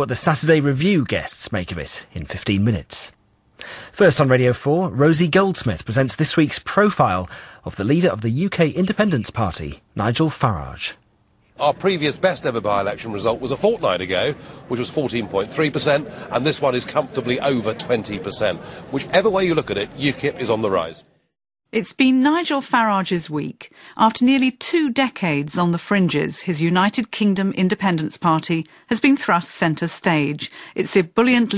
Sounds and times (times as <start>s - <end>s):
Speech: 0.0s - 3.2s, 4.0s - 11.0s, 11.6s - 21.0s, 21.8s - 31.5s.